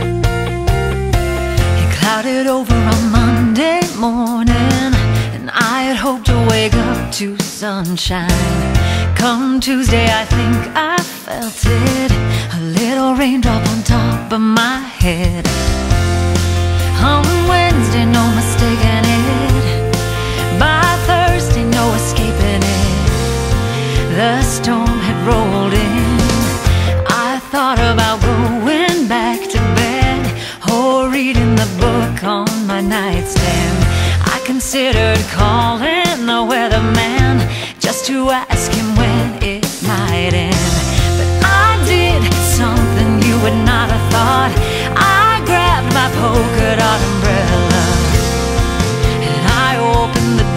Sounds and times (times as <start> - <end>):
Music: 0.0 - 50.5.